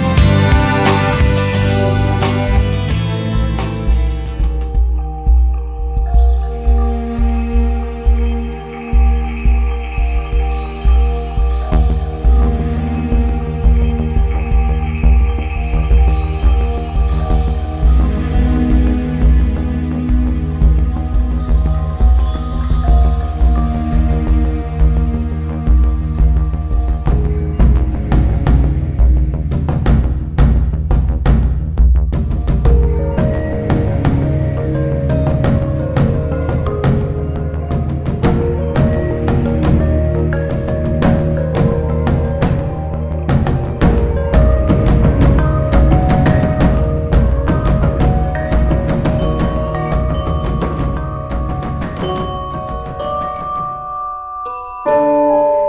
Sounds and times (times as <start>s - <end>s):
Music: 0.0s - 55.6s.